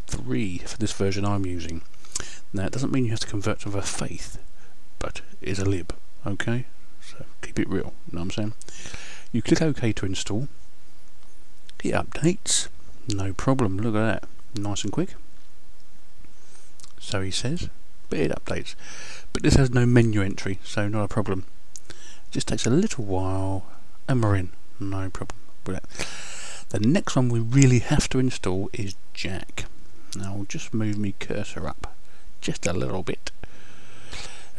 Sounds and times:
Speech: 0.1 - 1.8, 2.5 - 4.4, 5.0 - 8.6, 9.3 - 10.5, 11.8 - 15.2, 16.9 - 21.5, 22.3 - 25.9, 26.7 - 33.4.

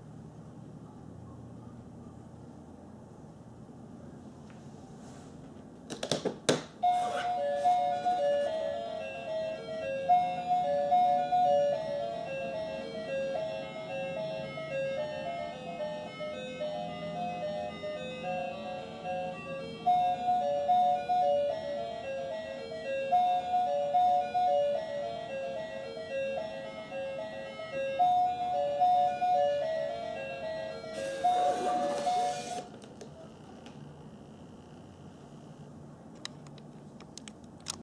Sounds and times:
Theme music: 28.3 - 32.7.

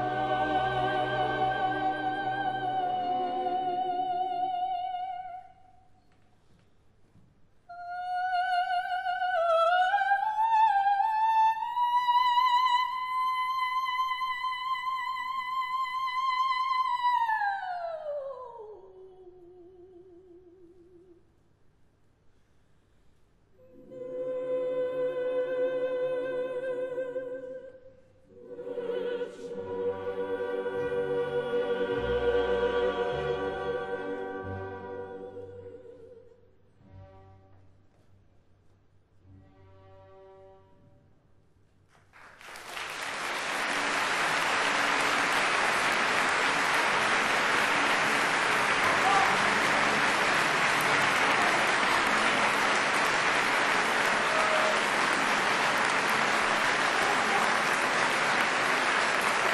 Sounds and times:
Inside, large room or hall: 0.0 - 59.5.

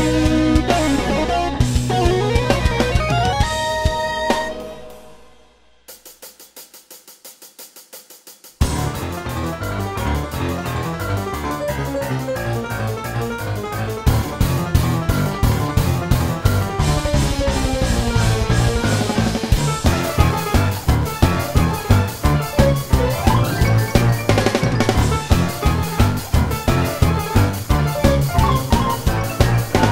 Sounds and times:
Electric piano: 0.0 - 5.2, 8.7 - 29.9.

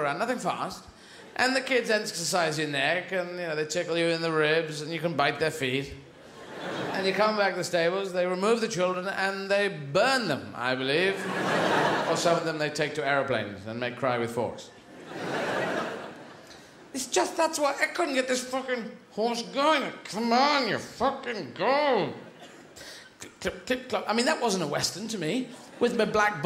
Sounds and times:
Speech: 0.0 - 6.1, 6.9 - 11.3, 12.0 - 14.8, 17.0 - 22.2, 23.2 - 26.4.

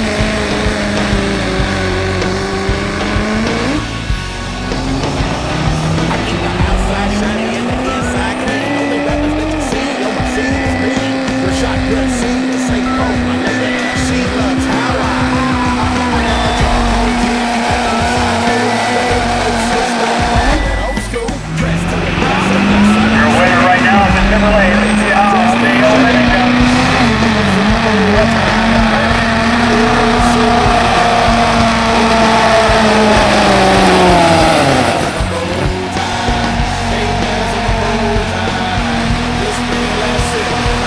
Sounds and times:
Race car, auto racing: 0.0 - 40.8.

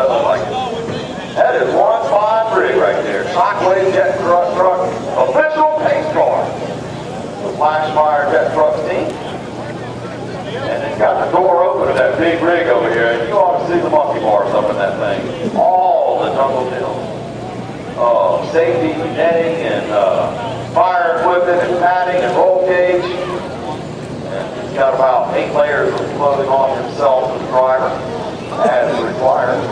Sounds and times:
Speech: 0.0 - 6.6, 7.4 - 17.2, 18.0 - 29.7
Vehicle: 0.0 - 29.7.

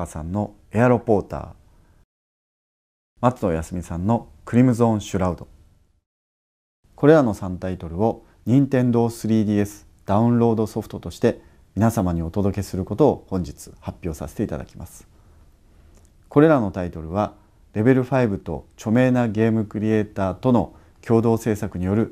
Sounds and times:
Speech: 0.0 - 1.6, 3.2 - 5.5, 7.0 - 15.1, 16.3 - 22.1.

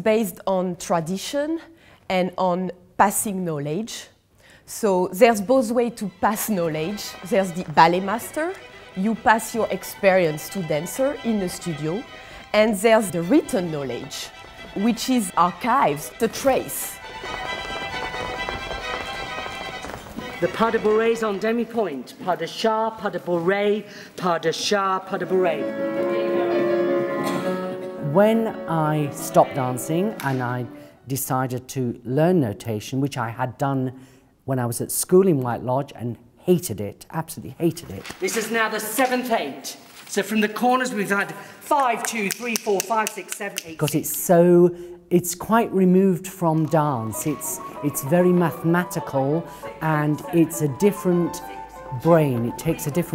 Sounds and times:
Music: 5.1 - 22.3, 24.7 - 31.1, 45.6 - 53.1
Speech: 20.4 - 25.7, 28.0 - 53.1.

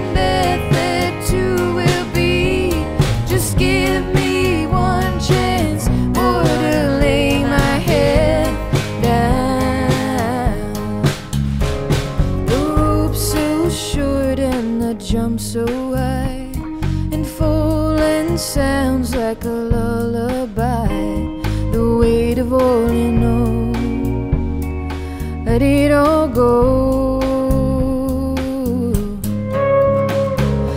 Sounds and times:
Music: 0.0 - 30.7.

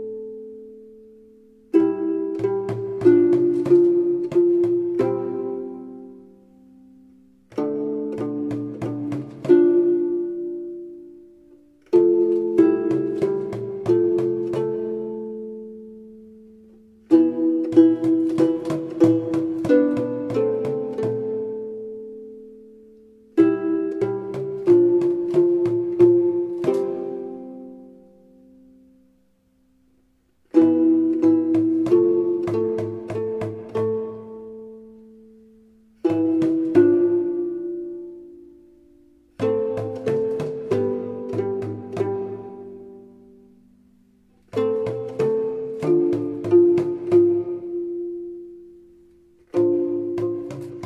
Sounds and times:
Music: 0.0 - 50.8.

